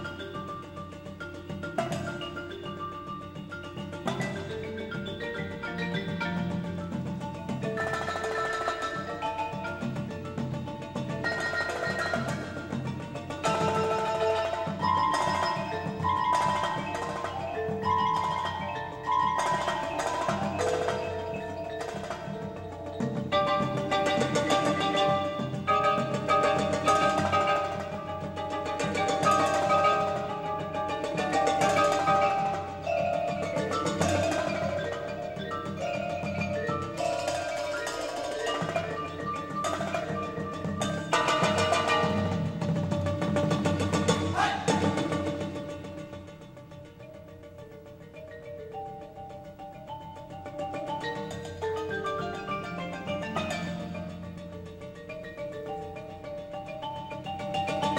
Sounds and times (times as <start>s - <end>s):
Tubular bells: 0.0s - 57.9s.